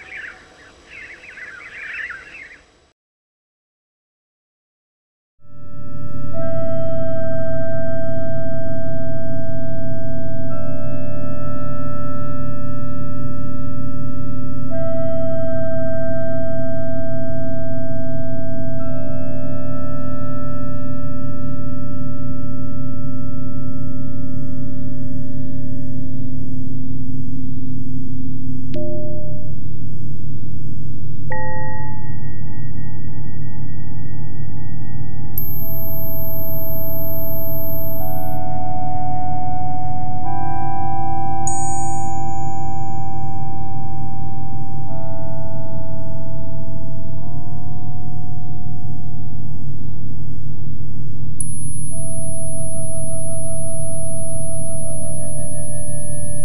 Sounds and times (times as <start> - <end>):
Music: 5.4 - 56.4.